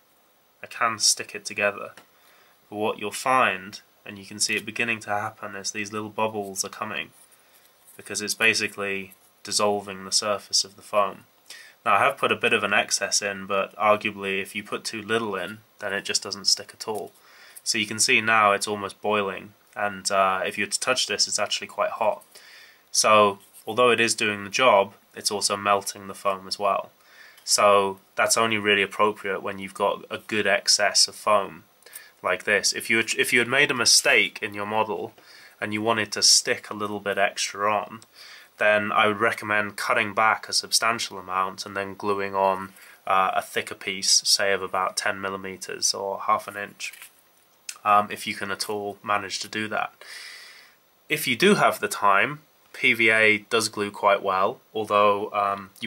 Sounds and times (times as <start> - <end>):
Speech: 0.6 - 2.0, 2.7 - 7.2, 8.0 - 22.3, 22.9 - 26.9, 27.5 - 47.1, 47.7 - 50.0, 51.1 - 55.8.